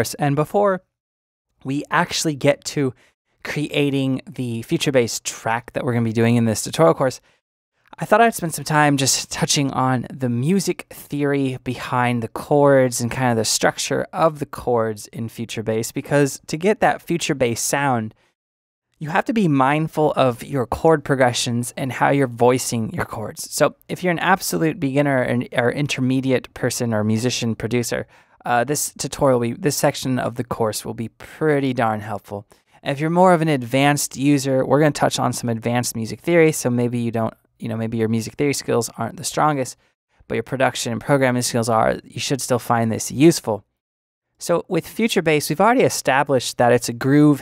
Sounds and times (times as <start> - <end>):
Speech: 0.0 - 0.9, 1.6 - 7.3, 7.9 - 18.2, 19.0 - 43.7, 44.4 - 47.4.